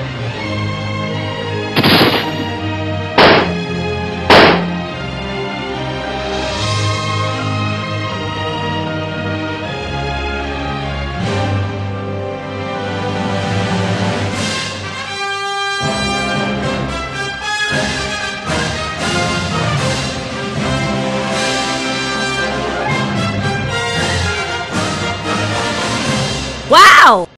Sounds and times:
Music: 0.0 - 26.8
Speech: 26.7 - 27.3.

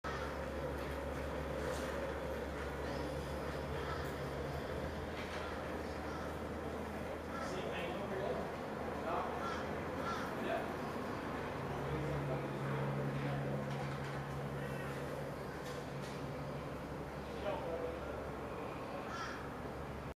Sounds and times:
Speech: 7.4 - 9.4, 17.3 - 18.3.

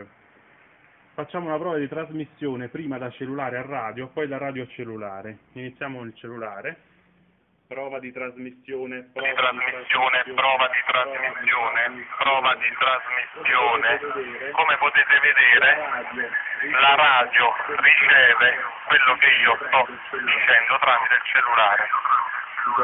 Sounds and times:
Speech: 1.2 - 6.8, 7.7 - 22.8
Radio: 9.0 - 22.8.

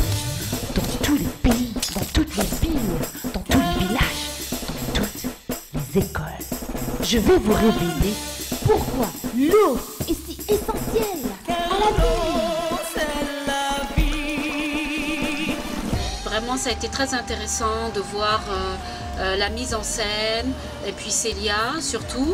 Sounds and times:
Music: 0.0 - 22.3
Speech: 0.7 - 4.2, 5.0 - 12.4, 16.2 - 22.3.

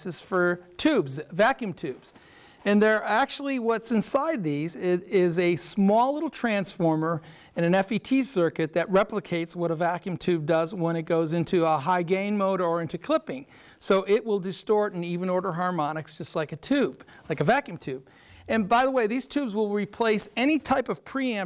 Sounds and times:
Speech: 0.0 - 21.4.

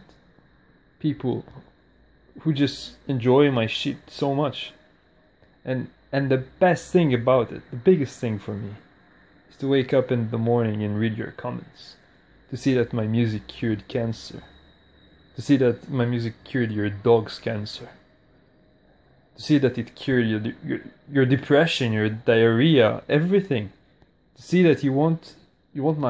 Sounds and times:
Speech: 1.0 - 1.7, 2.4 - 4.8, 5.6 - 8.9, 9.5 - 14.6, 15.4 - 18.0, 19.4 - 23.8, 24.4 - 26.0.

